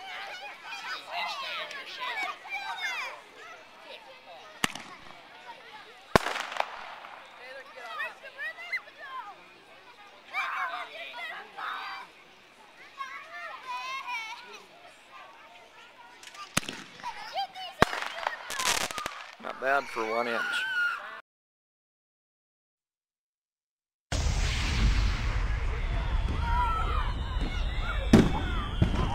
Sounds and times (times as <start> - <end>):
Outside, urban or manmade: 0.0 - 21.2, 24.1 - 29.1.